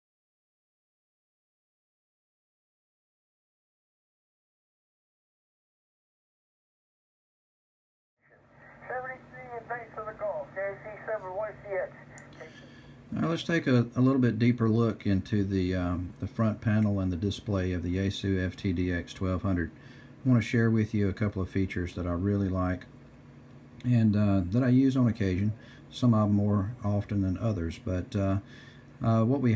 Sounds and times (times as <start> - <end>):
Radio: 8.3 - 12.6
Speech: 8.7 - 12.5, 13.1 - 22.9, 23.8 - 29.5.